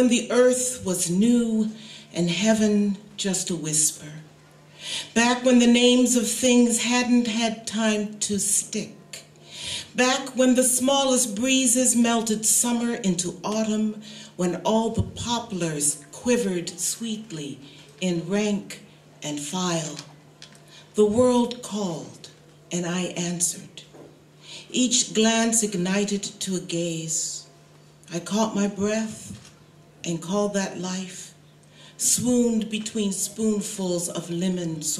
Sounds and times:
Speech: 0:00.0 - 0:04.3, 0:05.1 - 0:09.3, 0:09.9 - 0:20.1, 0:21.0 - 0:23.9, 0:24.7 - 0:27.5, 0:28.1 - 0:31.4, 0:32.0 - 0:34.9.

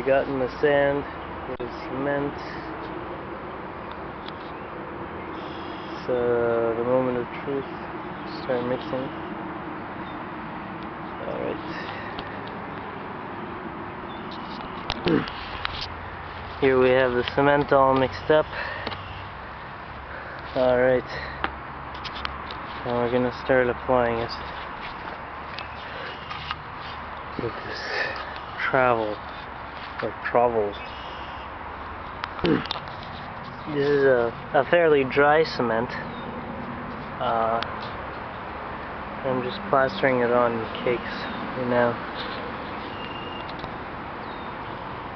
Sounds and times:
Speech: 0:00.0 - 0:02.7, 0:06.0 - 0:07.7, 0:08.3 - 0:09.2, 0:11.2 - 0:11.8, 0:16.6 - 0:18.5, 0:20.6 - 0:21.2, 0:22.8 - 0:24.4, 0:27.4 - 0:29.2, 0:30.0 - 0:30.8, 0:33.7 - 0:36.0, 0:37.2 - 0:37.7, 0:39.2 - 0:42.0.

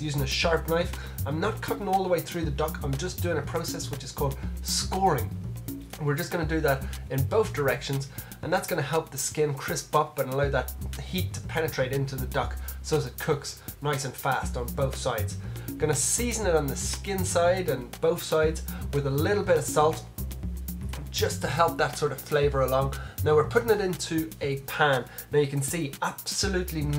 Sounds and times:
Speech: 0:00.0 - 0:05.3, 0:06.0 - 0:20.1, 0:21.2 - 0:26.9
Music: 0:00.0 - 0:26.9.

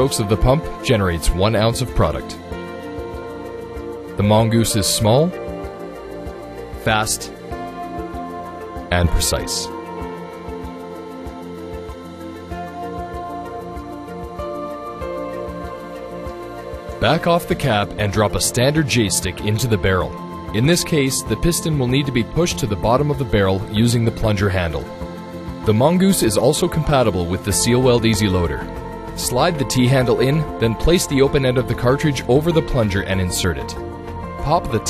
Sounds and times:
Speech: 0:00.0 - 0:02.4, 0:04.2 - 0:05.4, 0:06.8 - 0:07.4, 0:08.9 - 0:09.7, 0:17.0 - 0:24.9, 0:25.7 - 0:28.6, 0:29.2 - 0:33.8, 0:34.4 - 0:34.8
Music: 0:00.0 - 0:34.8.

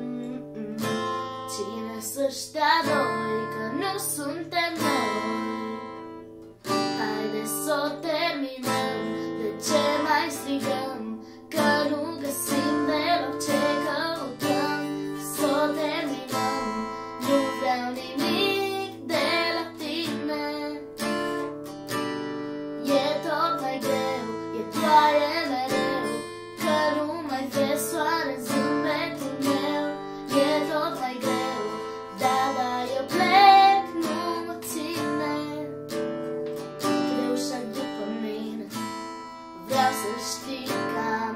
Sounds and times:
Music: 0:00.0 - 0:41.3.

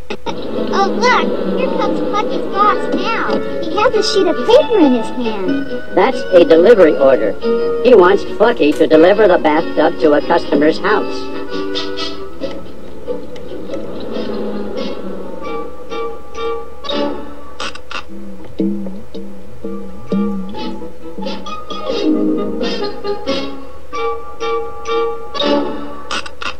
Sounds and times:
Music: 0:00.0 - 0:26.5
Speech: 0:00.7 - 0:11.3.

